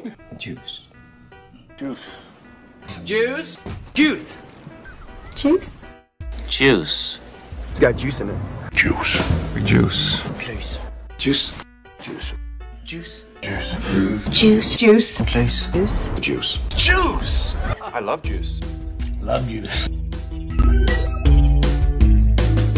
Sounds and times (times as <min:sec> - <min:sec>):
Music: 0:00.0 - 0:22.7.